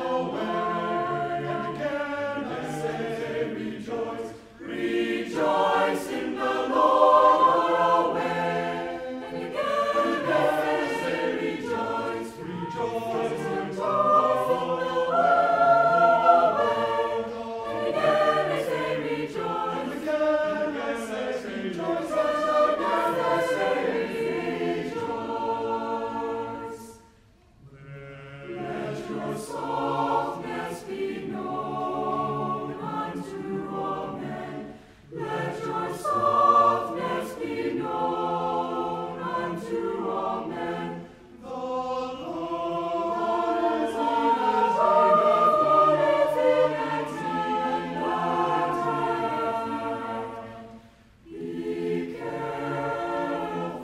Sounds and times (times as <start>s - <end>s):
Gospel music: 0.0s - 53.8s.